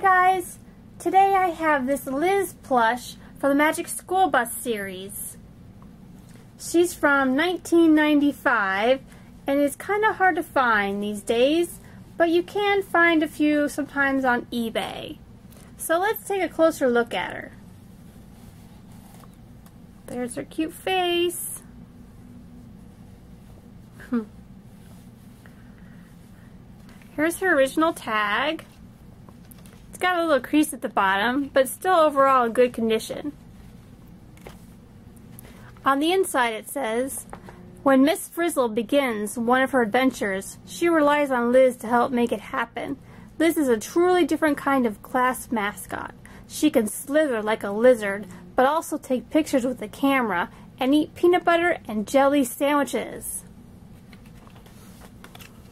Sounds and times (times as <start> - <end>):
Speech: 0.0 - 5.4, 6.6 - 15.2, 15.8 - 17.6, 20.1 - 21.7, 27.2 - 28.7, 30.0 - 33.4, 35.8 - 53.5
Inside, small room: 0.0 - 55.7.